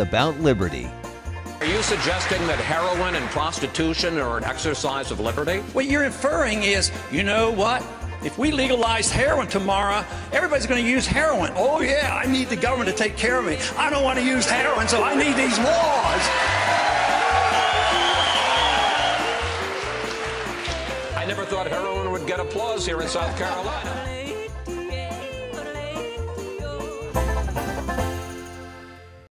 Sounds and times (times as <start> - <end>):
Music: 0.0 - 29.3.